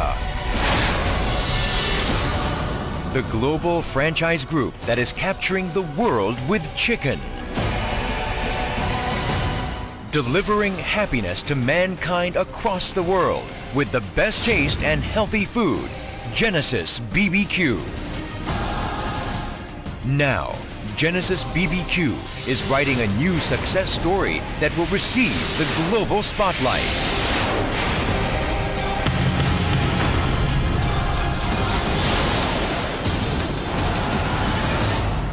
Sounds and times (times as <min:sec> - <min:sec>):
Speech: 0:00.0 - 0:00.2, 0:03.1 - 0:07.3, 0:10.1 - 0:17.9, 0:20.0 - 0:27.0
Music: 0:00.0 - 0:35.3.